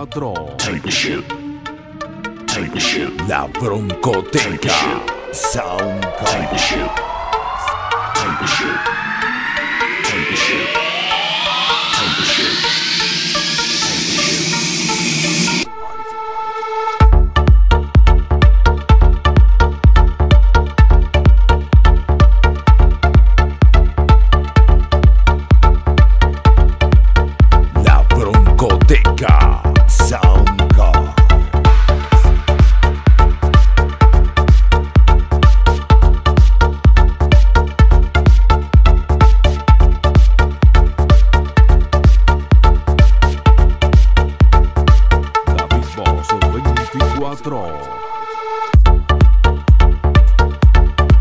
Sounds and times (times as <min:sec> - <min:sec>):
Speech: 0:00.0 - 0:01.3, 0:02.5 - 0:07.0, 0:27.8 - 0:31.3, 0:45.5 - 0:48.0
Music: 0:00.0 - 0:51.2.